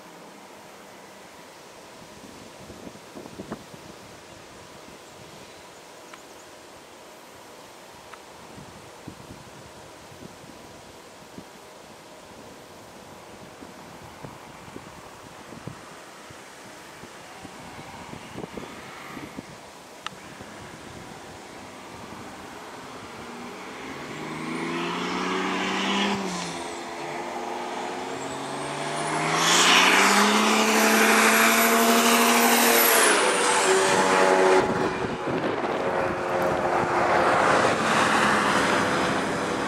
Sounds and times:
Car: 0:13.4 - 0:39.6.

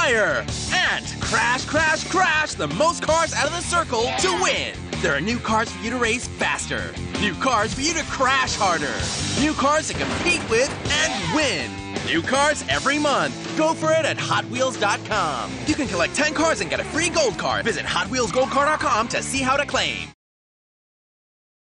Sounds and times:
Music: 0:00.0 - 0:20.2
Speech: 0:00.0 - 0:20.2.

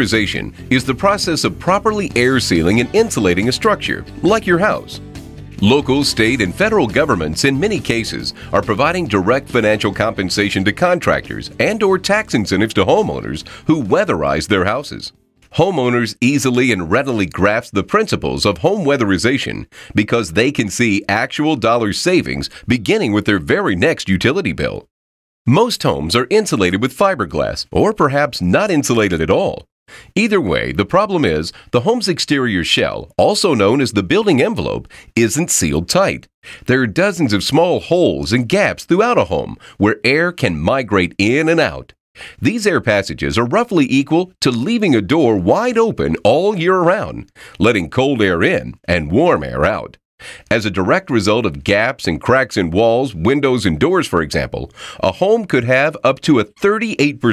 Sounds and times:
Speech: 0:00.0 - 0:05.0, 0:05.6 - 0:24.9, 0:25.5 - 0:57.3.

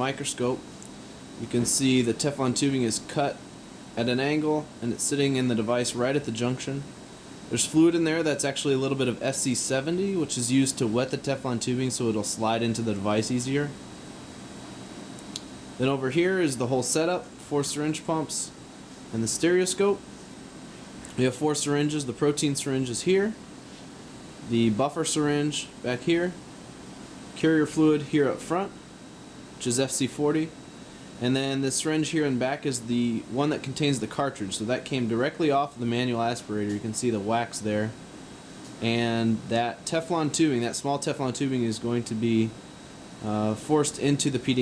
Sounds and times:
Speech: 0:00.0 - 0:00.6, 0:01.4 - 0:03.4, 0:04.0 - 0:13.8, 0:15.8 - 0:20.0, 0:21.1 - 0:23.4, 0:24.4 - 0:26.4, 0:27.4 - 0:28.8, 0:29.6 - 0:30.6, 0:31.2 - 0:38.0, 0:38.8 - 0:42.6, 0:43.2 - 0:44.6.

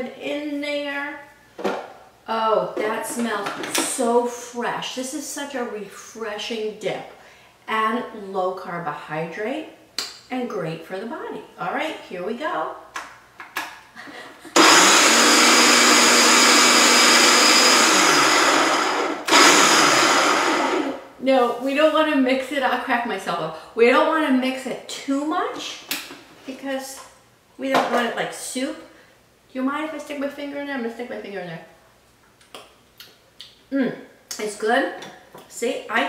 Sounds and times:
Blender: 0:14.6 - 0:21.1.

